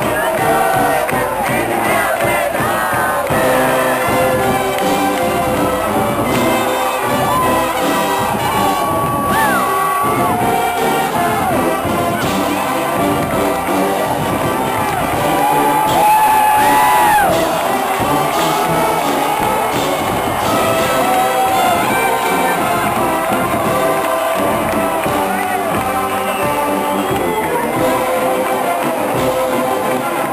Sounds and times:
Cheering: 0:00.0 - 0:30.3
Crowd: 0:00.0 - 0:30.3
Hubbub, speech noise, speech babble: 0:00.0 - 0:30.3
Music: 0:00.0 - 0:30.3.

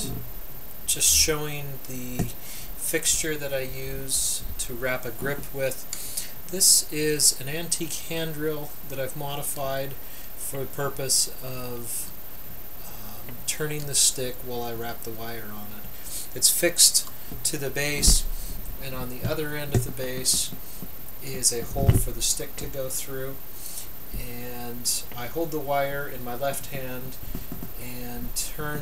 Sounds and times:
Speech: 0:00.0 - 0:00.2, 0:00.9 - 0:05.8, 0:06.5 - 0:12.2, 0:12.9 - 0:20.6, 0:21.2 - 0:23.4, 0:24.2 - 0:27.2, 0:27.8 - 0:28.8.

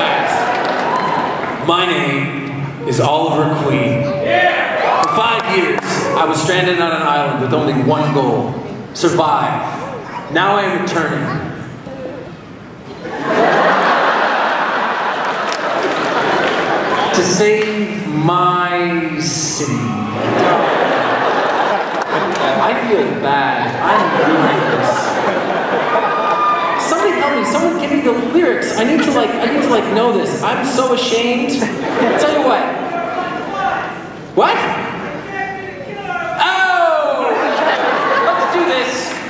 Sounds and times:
Speech: 0:17.1 - 0:20.2, 0:22.4 - 0:25.2, 0:26.8 - 0:37.4.

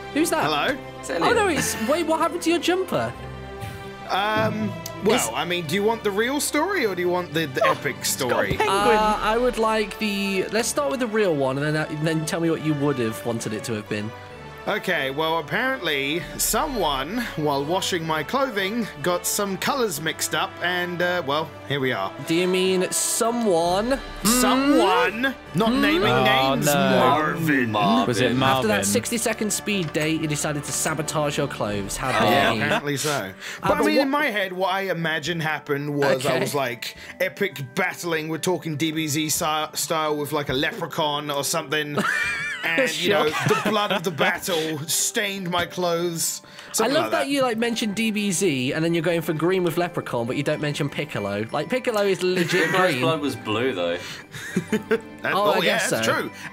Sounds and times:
Music: 0:00.0 - 0:56.5
Speech: 0:04.1 - 0:14.1, 0:14.7 - 0:42.0, 0:42.6 - 0:53.8, 0:55.3 - 0:56.3.

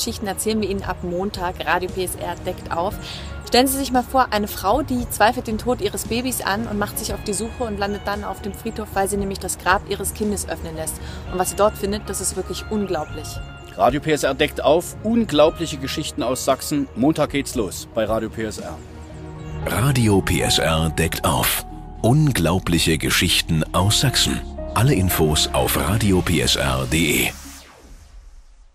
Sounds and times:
Music: 0:00.0 - 0:28.7
Speech: 0:19.7 - 0:27.4.

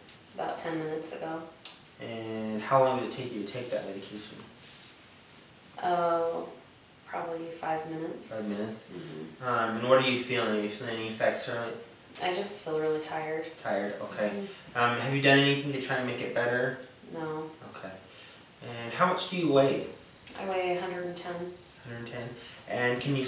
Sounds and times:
Inside, small room: 0:00.0 - 0:23.2
Speech: 0:00.4 - 0:04.5, 0:05.8 - 0:18.0, 0:18.6 - 0:23.2.

